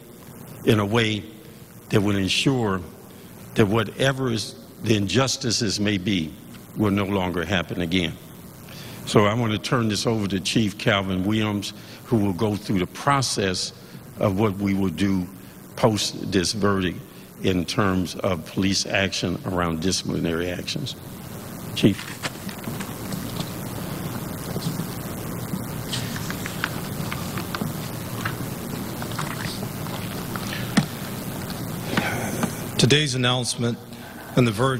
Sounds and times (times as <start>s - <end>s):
Speech: 0.6s - 1.3s, 1.9s - 2.9s, 3.6s - 8.2s, 9.1s - 21.0s, 21.8s - 22.1s, 32.8s - 34.7s.